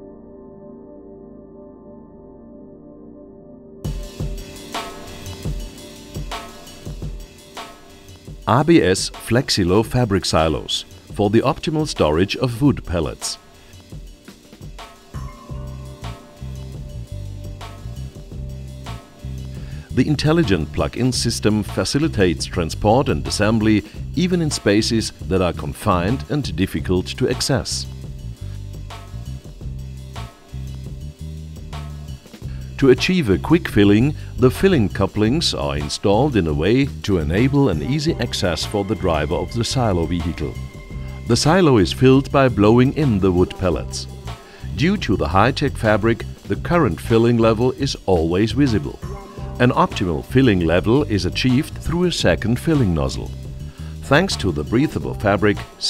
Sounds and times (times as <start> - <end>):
Music: 0.0 - 55.8
Speech: 8.5 - 13.4, 19.9 - 27.9, 32.8 - 40.6, 41.3 - 44.1, 44.7 - 49.0, 49.6 - 53.4, 54.0 - 55.8.